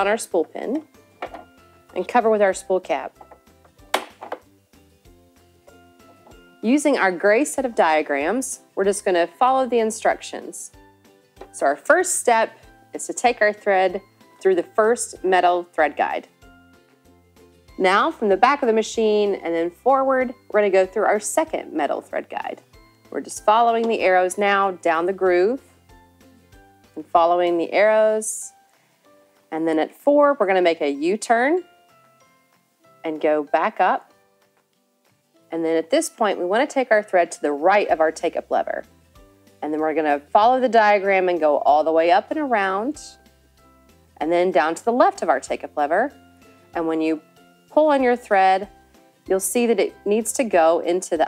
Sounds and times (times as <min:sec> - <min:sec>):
Music: 0:00.0 - 0:51.2
Speech: 0:02.0 - 0:03.1, 0:11.6 - 0:16.3, 0:17.8 - 0:22.6, 0:23.2 - 0:25.6, 0:27.0 - 0:28.5, 0:33.1 - 0:34.0, 0:35.5 - 0:38.8, 0:39.6 - 0:43.2, 0:44.2 - 0:46.2, 0:46.8 - 0:47.2, 0:47.8 - 0:48.7, 0:49.3 - 0:51.2.